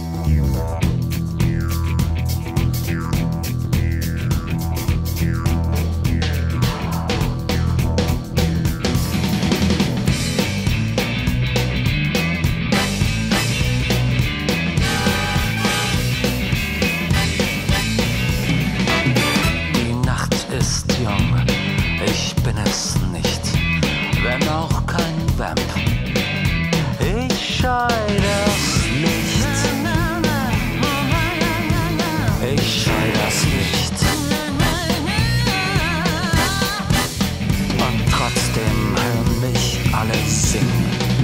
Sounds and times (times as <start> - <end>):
Music: 0.0 - 41.2.